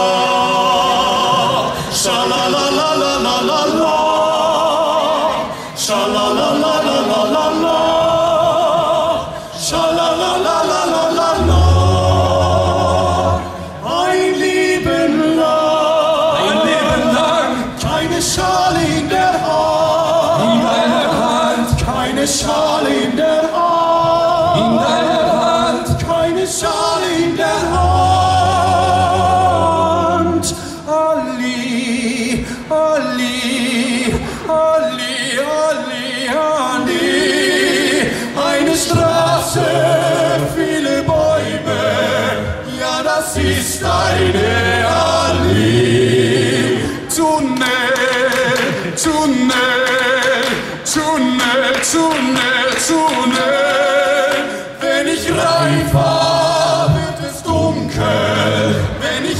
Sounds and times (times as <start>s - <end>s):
A capella: 0.0s - 59.3s.